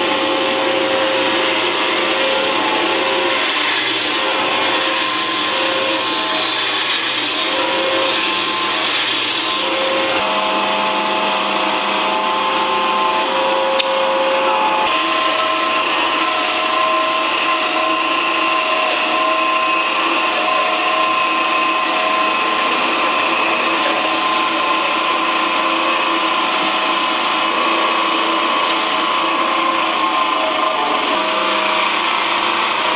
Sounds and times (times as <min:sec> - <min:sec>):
Power tool: 0:00.0 - 0:32.9.